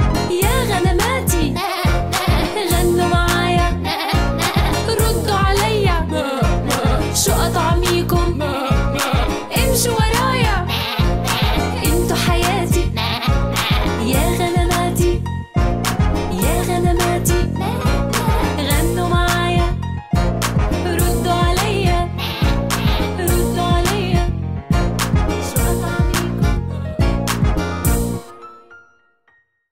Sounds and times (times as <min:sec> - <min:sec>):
Music: 0:00.0 - 0:29.7.